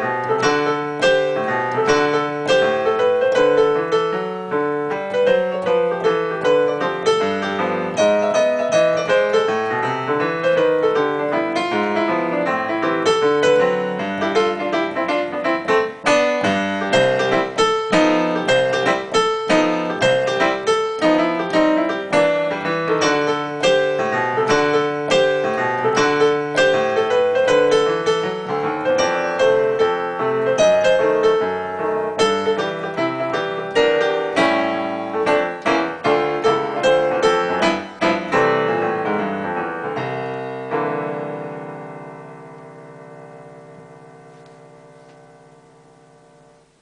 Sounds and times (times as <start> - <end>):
Music: 0.0 - 46.8.